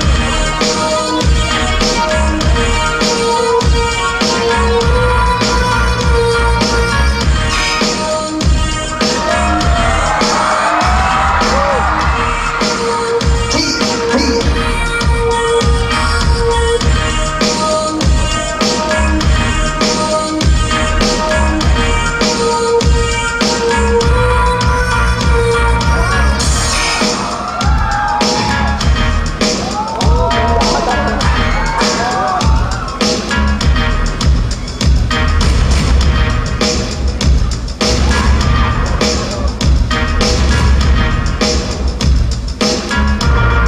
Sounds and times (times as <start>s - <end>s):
Music: 0.0s - 43.6s.